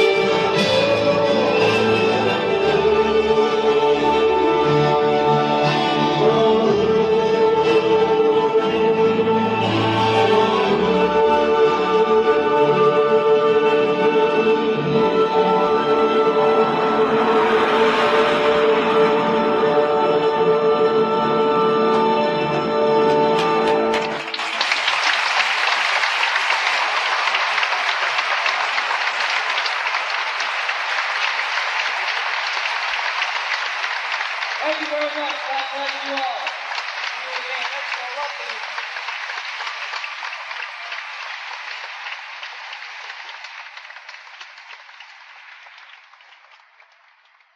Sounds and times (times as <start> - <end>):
Applause: 16.7 - 19.3, 23.1 - 47.5.